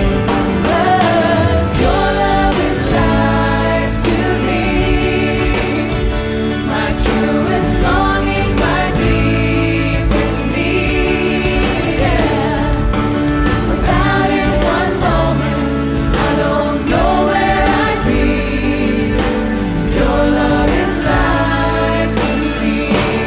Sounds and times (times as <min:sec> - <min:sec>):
Christian music: 0:00.0 - 0:23.2
Inside, large room or hall: 0:00.0 - 0:23.2
Inside, public space: 0:00.0 - 0:23.2
Singing: 0:00.0 - 0:23.2.